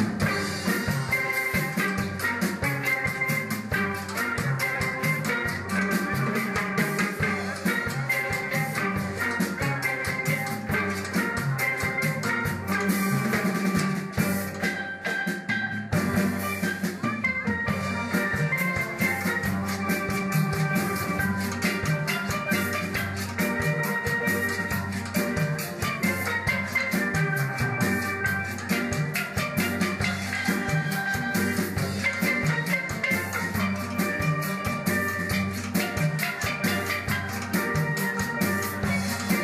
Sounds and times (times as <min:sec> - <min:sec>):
Drum: 0:00.0 - 0:39.4.